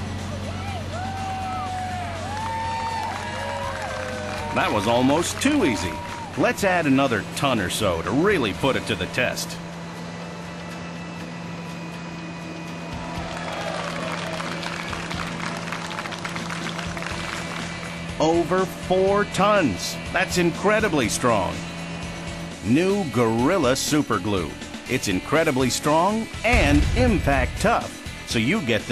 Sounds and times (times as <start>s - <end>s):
Music: 0.0s - 28.9s
Vehicle: 0.0s - 28.9s
Speech: 4.6s - 9.6s, 18.2s - 21.6s, 22.7s - 28.9s.